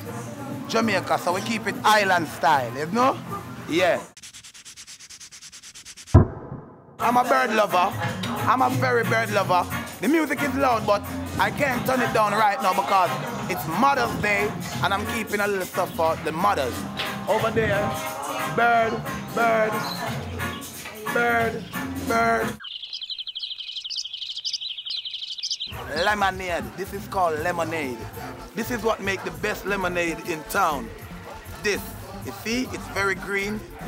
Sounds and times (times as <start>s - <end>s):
Chirp, tweet: 22.5s - 26.2s.